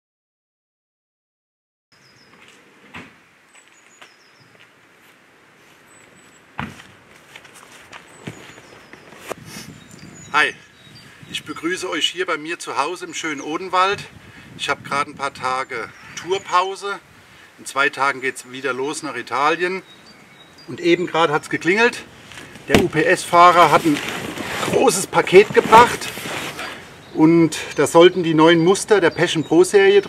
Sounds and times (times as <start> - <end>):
Speech: 11.3 - 17.0, 17.6 - 19.8, 20.7 - 22.1, 22.7 - 26.2, 27.2 - 30.0.